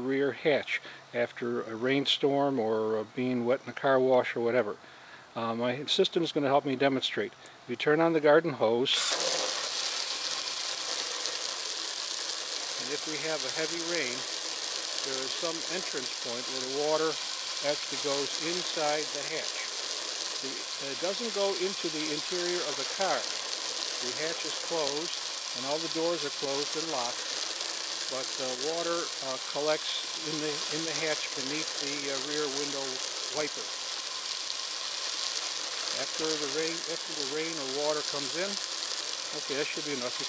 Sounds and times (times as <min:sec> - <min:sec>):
Speech: 0:00.0 - 0:04.8, 0:05.4 - 0:09.0, 0:12.8 - 0:14.2, 0:15.0 - 0:19.7, 0:20.4 - 0:23.3, 0:24.0 - 0:27.2, 0:28.1 - 0:33.7, 0:36.0 - 0:38.6, 0:39.3 - 0:40.2.